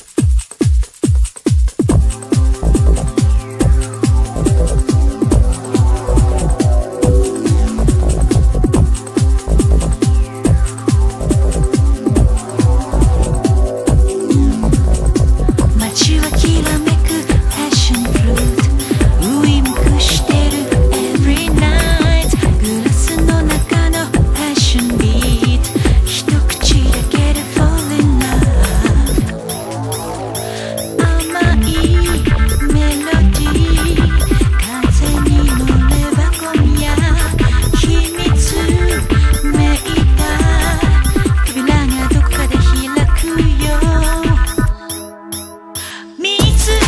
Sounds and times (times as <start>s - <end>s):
Music: 0.0s - 46.8s.